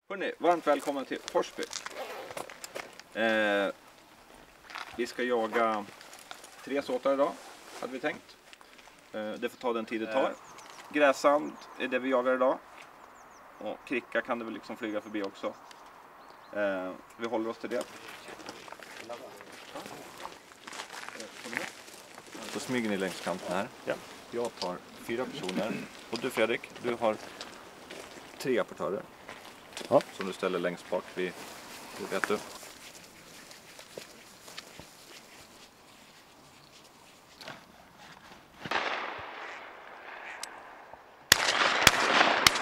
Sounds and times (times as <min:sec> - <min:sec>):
Speech: 0:00.1 - 0:01.7, 0:05.0 - 0:05.9, 0:09.2 - 0:10.4, 0:13.6 - 0:15.6, 0:16.5 - 0:20.4, 0:22.4 - 0:27.2, 0:28.4 - 0:29.0, 0:29.9 - 0:31.4, 0:32.0 - 0:32.5.